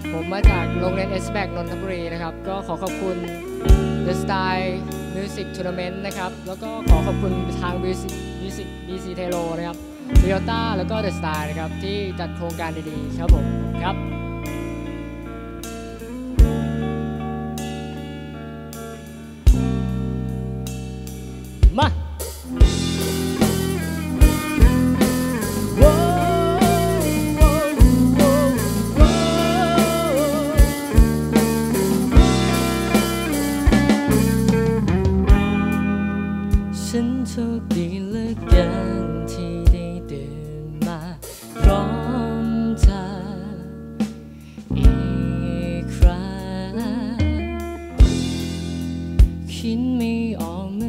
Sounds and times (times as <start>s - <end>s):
Soul music: 0.0s - 50.8s.